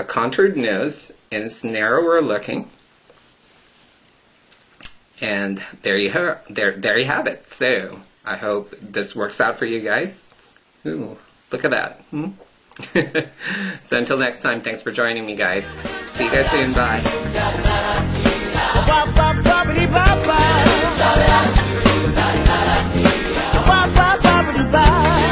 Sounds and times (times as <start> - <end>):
Speech: 0.0 - 2.8, 5.2 - 12.4, 13.8 - 17.1
Inside, small room: 0.0 - 25.3.